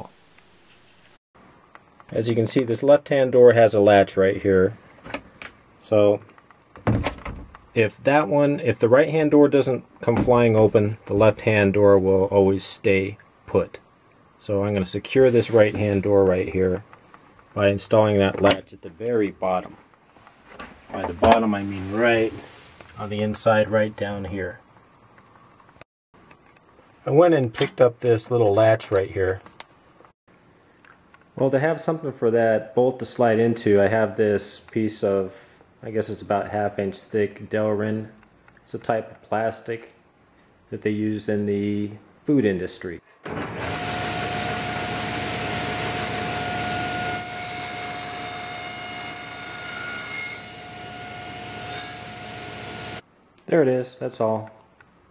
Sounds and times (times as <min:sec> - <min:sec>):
Speech: 0:02.1 - 0:04.8, 0:05.8 - 0:06.3, 0:07.8 - 0:13.8, 0:14.4 - 0:16.9, 0:17.6 - 0:19.8, 0:20.9 - 0:24.6, 0:27.0 - 0:29.5, 0:31.4 - 0:40.0, 0:40.7 - 0:43.0, 0:53.5 - 0:54.6
Door: 0:06.8 - 0:07.6.